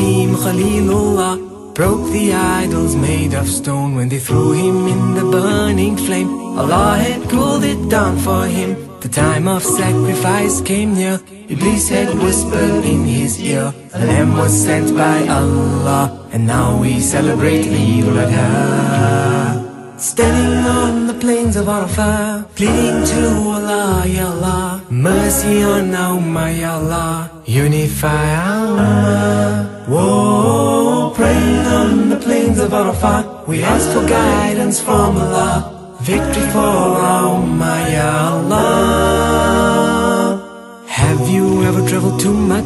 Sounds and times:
Music: 0:00.0 - 0:42.6.

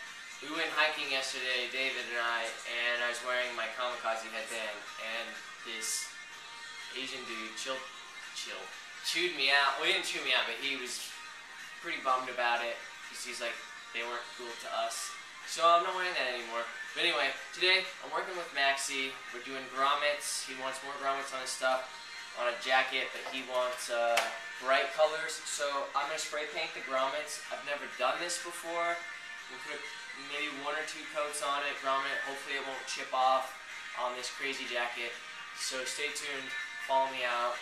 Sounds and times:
Music: 0:00.0 - 0:37.6
Speech: 0:00.4 - 0:06.1, 0:07.0 - 0:11.1, 0:11.8 - 0:37.6.

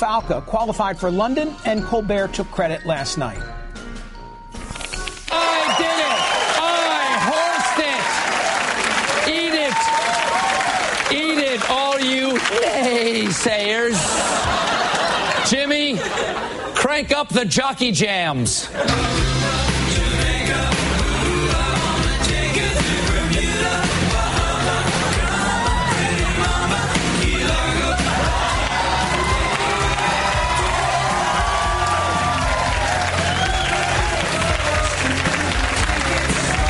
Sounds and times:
Speech: 0:11.1 - 0:14.2, 0:16.8 - 0:18.8.

